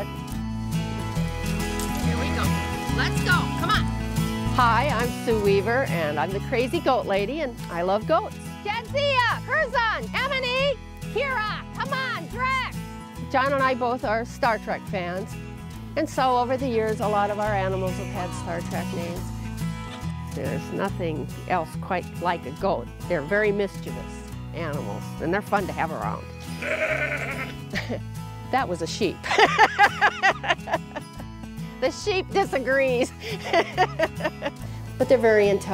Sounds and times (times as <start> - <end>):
Music: 0.0 - 35.7.